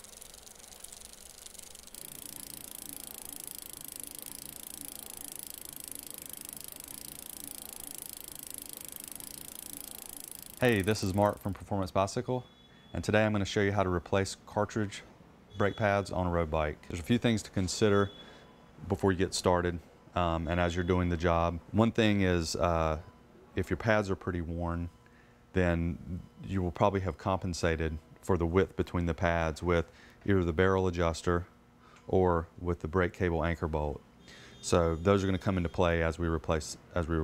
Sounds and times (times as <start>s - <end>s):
Speech: 10.6s - 18.1s, 18.9s - 23.0s, 23.6s - 24.9s, 25.6s - 31.5s, 32.1s - 34.0s, 34.6s - 37.2s.